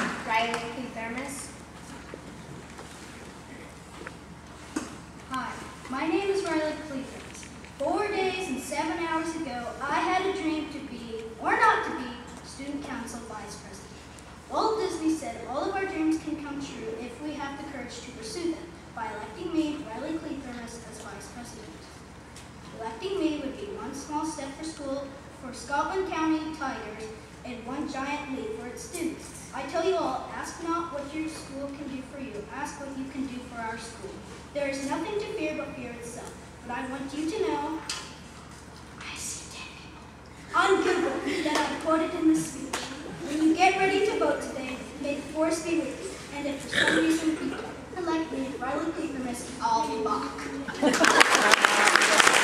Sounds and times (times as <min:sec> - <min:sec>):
Child speech, kid speaking: 0:00.0 - 0:01.6, 0:05.3 - 0:13.9, 0:14.5 - 0:21.9, 0:22.7 - 0:38.0, 0:39.0 - 0:50.8
Narration, monologue: 0:00.0 - 0:51.5.